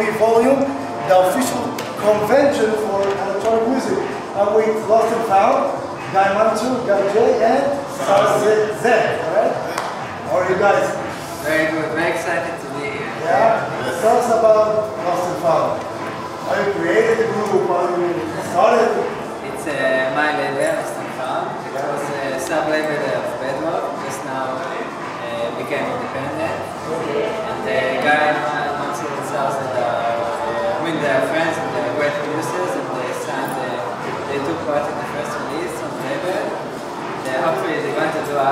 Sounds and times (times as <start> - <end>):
Music: 0.0 - 38.5.